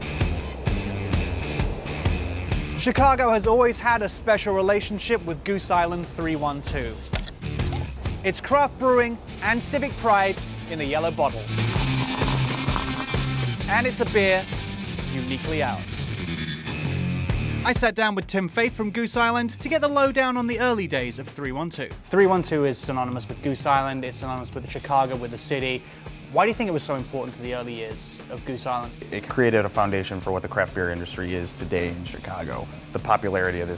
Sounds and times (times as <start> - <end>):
Music: 0.0 - 33.7
Speech: 2.8 - 7.0, 8.2 - 11.4, 13.6 - 14.5, 15.1 - 16.1, 17.6 - 33.7.